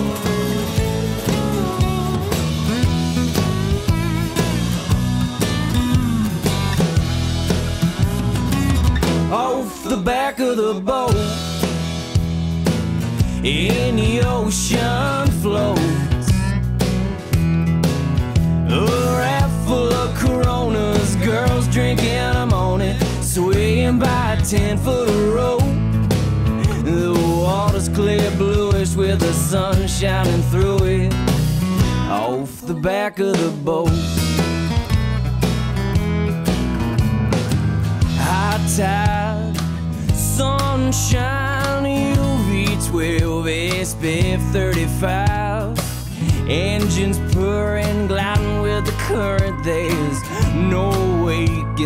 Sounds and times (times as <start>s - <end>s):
Music: 0.0s - 51.8s.